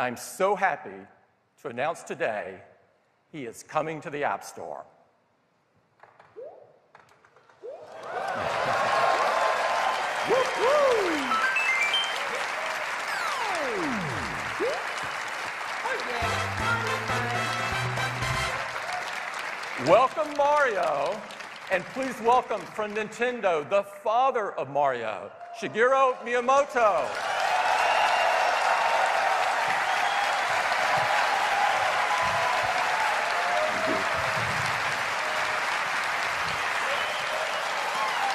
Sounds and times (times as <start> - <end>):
Speech: 0.0 - 2.7, 3.4 - 4.9, 19.8 - 27.1.